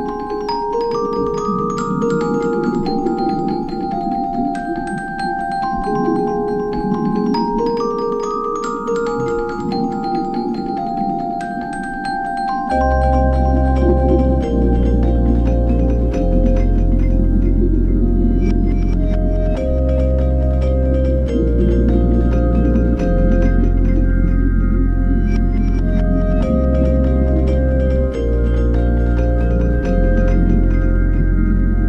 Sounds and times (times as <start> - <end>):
Music: 0.0 - 31.8.